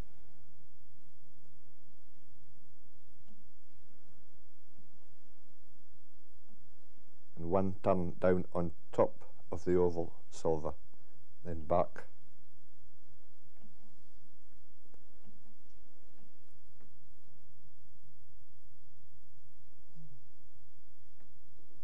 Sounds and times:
Speech: 7.4s - 10.8s, 11.5s - 12.2s.

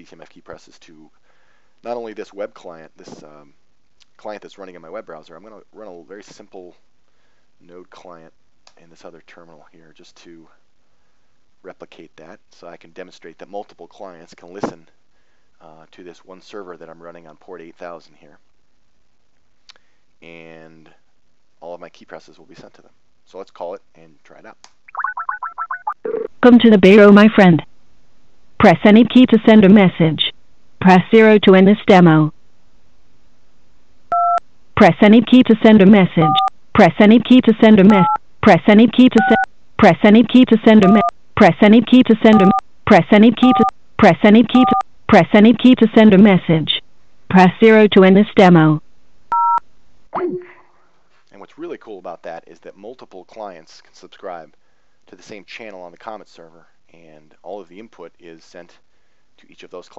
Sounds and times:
Speech: 0.0s - 1.2s, 1.8s - 6.8s, 7.6s - 10.6s, 11.7s - 14.9s, 15.6s - 18.4s, 20.2s - 21.0s, 21.6s - 24.6s, 26.4s - 27.7s, 28.6s - 32.3s, 34.8s - 48.8s, 50.2s - 50.6s, 51.3s - 58.8s, 59.4s - 59.9s.

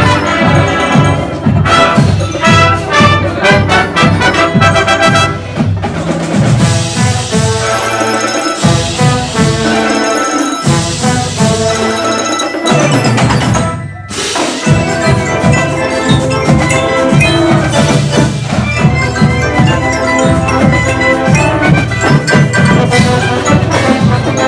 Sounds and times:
Brass instrument: 0.0s - 24.4s.

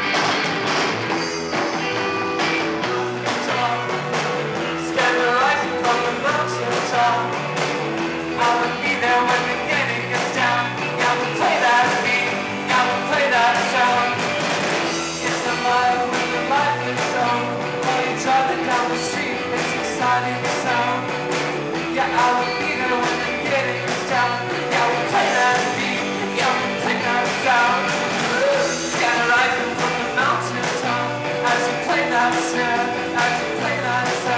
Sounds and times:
Music: 0.0s - 34.3s.

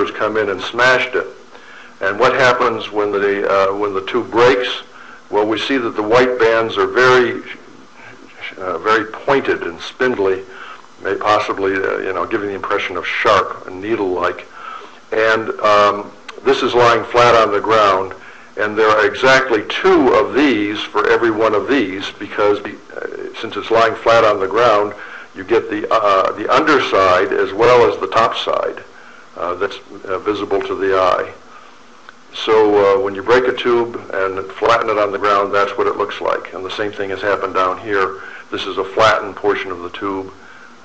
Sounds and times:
Speech: 0.0s - 1.4s, 2.0s - 14.5s, 15.1s - 31.4s, 32.3s - 40.4s.

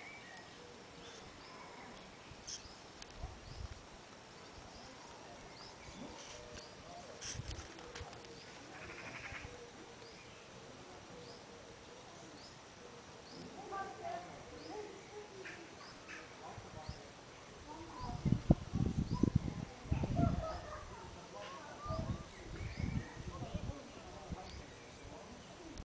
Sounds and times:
Speech: 13.3s - 25.8s.

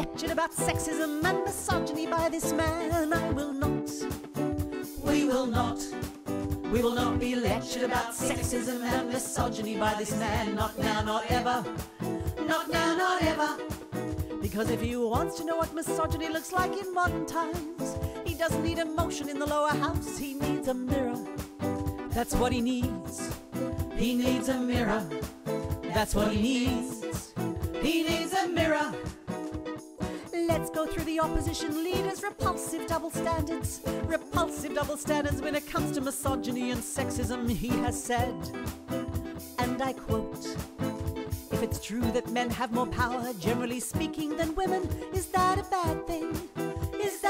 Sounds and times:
Music: 0.0s - 47.2s.

